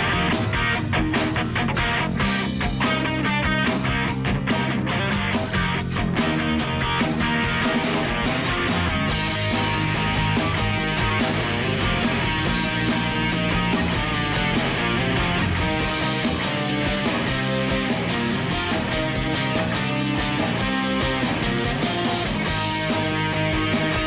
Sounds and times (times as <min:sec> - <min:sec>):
Rock and roll: 0:00.0 - 0:24.0.